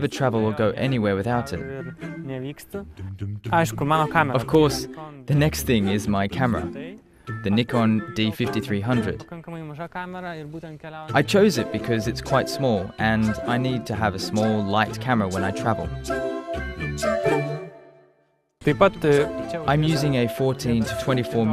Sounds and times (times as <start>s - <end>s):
Music: 0.0s - 9.4s, 11.1s - 21.5s
Speech: 0.0s - 15.9s, 18.6s - 21.5s.